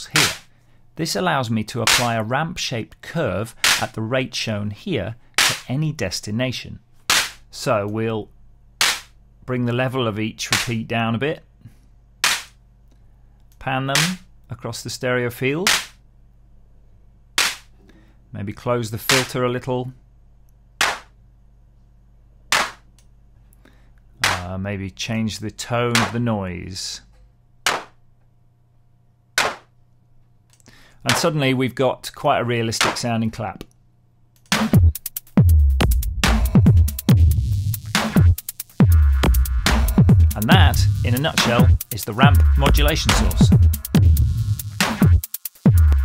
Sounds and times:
Drum machine: 0.2 - 0.4, 34.5 - 46.0
Speech: 1.0 - 6.8, 7.5 - 8.3, 9.5 - 11.5, 13.6 - 15.7, 18.3 - 20.0, 24.2 - 27.1, 31.0 - 33.7, 40.3 - 43.5
Synthesizer: 36.0 - 46.0.

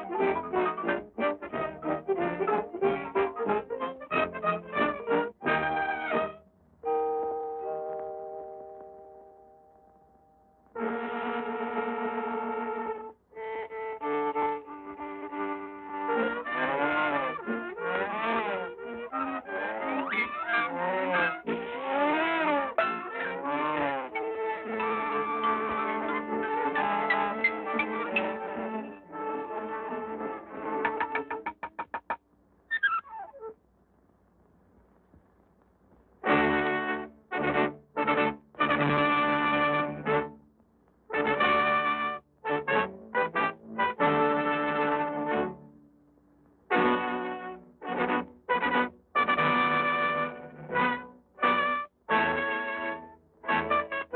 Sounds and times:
Music: 0.0 - 32.2, 36.2 - 54.1.

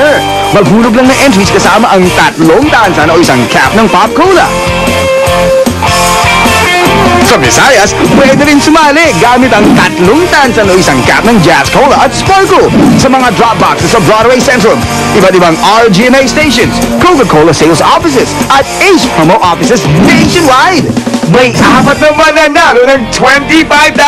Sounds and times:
Speech: 0.0 - 4.5, 7.2 - 24.0
Music: 0.0 - 24.0.

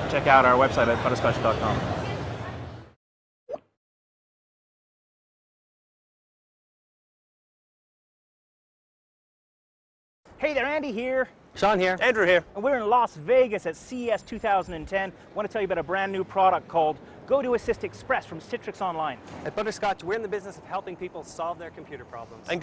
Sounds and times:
Speech: 10.4 - 22.6.

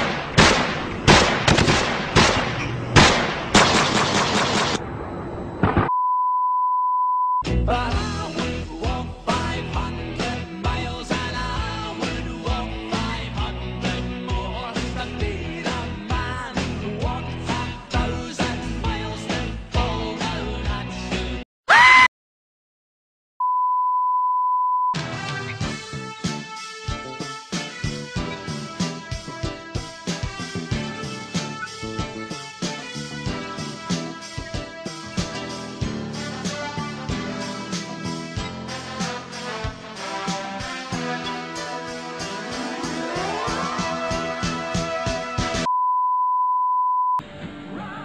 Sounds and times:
Music: 7.4 - 21.4, 25.0 - 45.7, 47.2 - 48.0.

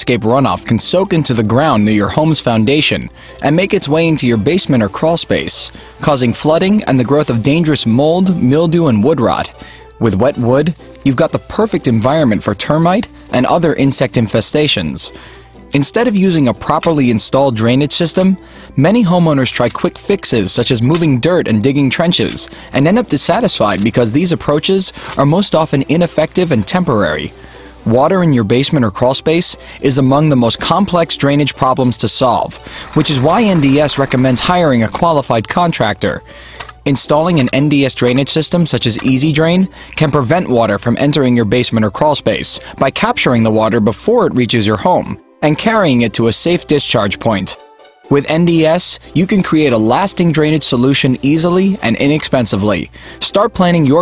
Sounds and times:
Speech: 0.0 - 27.3, 27.9 - 36.2, 36.8 - 54.0
Music: 0.0 - 54.0.

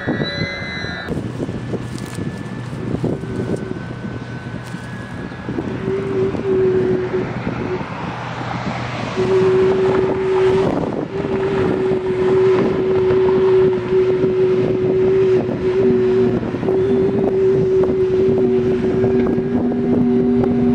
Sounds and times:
Wind noise (microphone): 0.0 - 20.7.

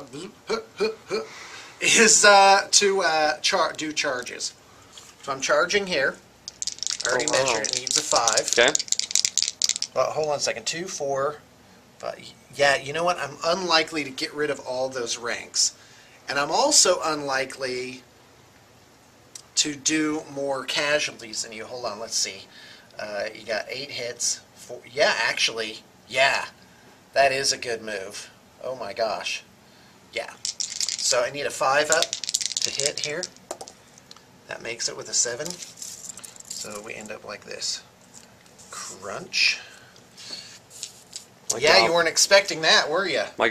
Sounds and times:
Speech: 1.8 - 4.6, 5.2 - 6.2, 7.0 - 8.8, 10.0 - 11.4, 12.0 - 18.1, 19.6 - 26.6, 27.2 - 29.5, 31.0 - 33.3, 34.5 - 35.6, 36.6 - 37.9, 38.7 - 39.7, 41.5 - 43.5.

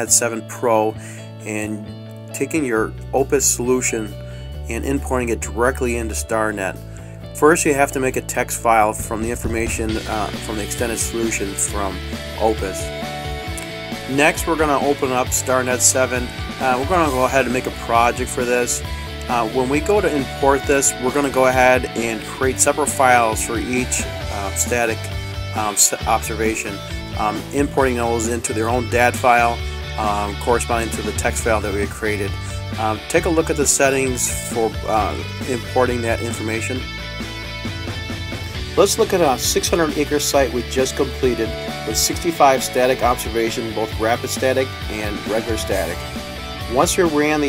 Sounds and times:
Speech: 0.0 - 6.8, 7.4 - 12.9, 14.1 - 36.8, 38.8 - 46.0, 46.7 - 47.4
Music: 0.0 - 47.4.

